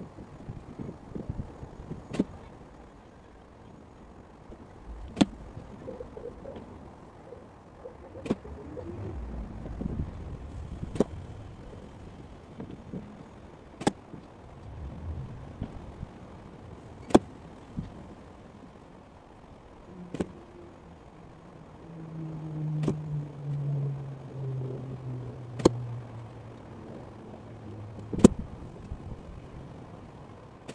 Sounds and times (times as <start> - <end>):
Wind noise (microphone): 0.1 - 2.2, 8.2 - 12.9, 14.6 - 16.4.